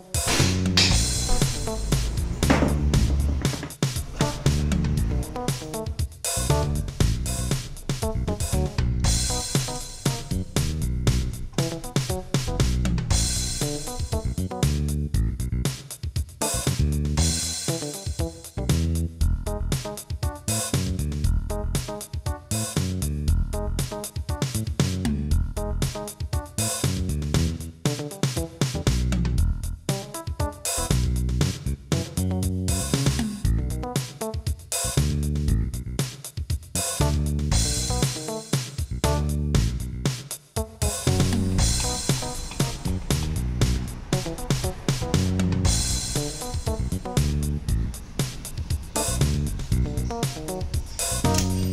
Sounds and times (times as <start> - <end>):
Drum kit: 0.0 - 51.7.